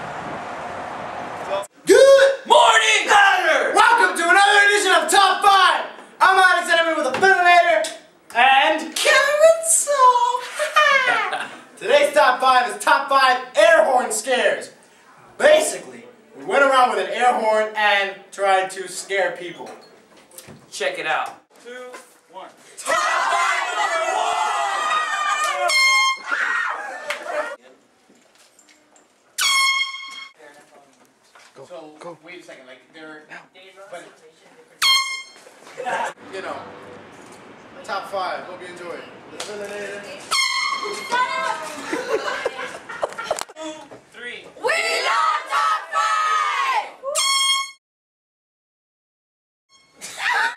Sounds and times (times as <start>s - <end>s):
Air horn, truck horn: 25.6s - 26.3s, 29.4s - 30.4s, 34.8s - 35.4s, 40.3s - 41.1s, 47.2s - 47.8s, 49.7s - 50.0s.